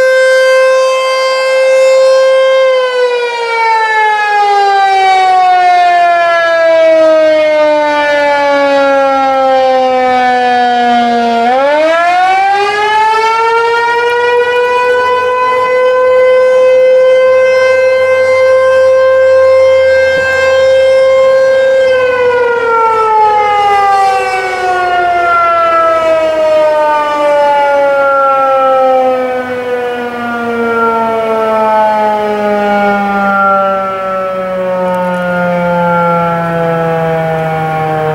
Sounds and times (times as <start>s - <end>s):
Siren: 0.0s - 38.1s.